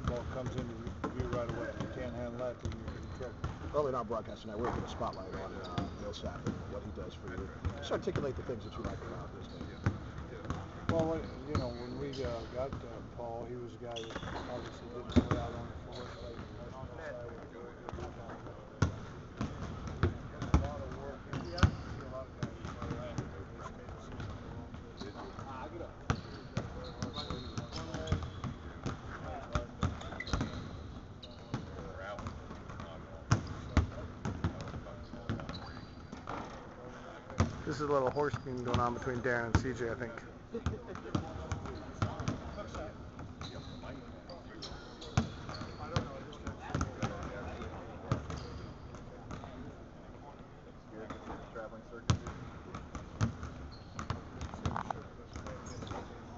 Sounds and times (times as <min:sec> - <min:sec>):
Speech: 0:00.0 - 0:19.0, 0:20.1 - 0:26.0, 0:36.7 - 0:52.1.